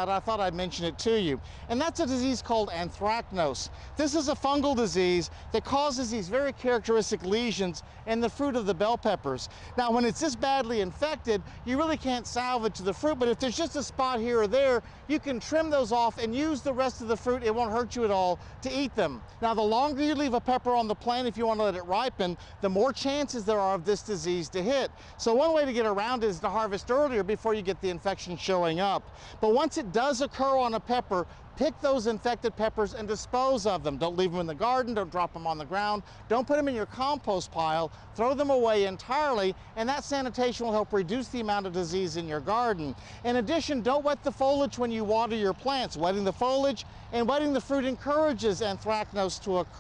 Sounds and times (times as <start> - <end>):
Speech: 0.0 - 49.8.